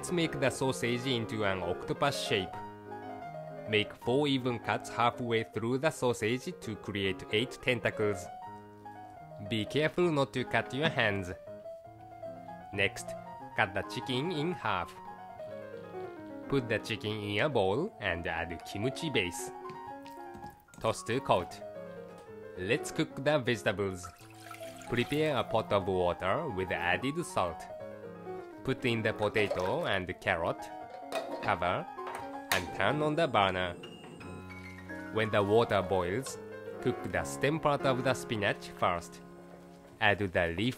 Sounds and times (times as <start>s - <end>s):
Speech: 0.0s - 2.6s, 3.7s - 8.3s, 9.4s - 11.4s, 12.7s - 15.0s, 16.5s - 19.5s, 20.8s - 21.6s, 22.6s - 24.1s, 24.9s - 27.7s, 28.6s - 30.7s, 31.4s - 31.9s, 32.6s - 33.8s, 35.2s - 39.2s, 40.0s - 40.7s
Music: 0.0s - 40.7s.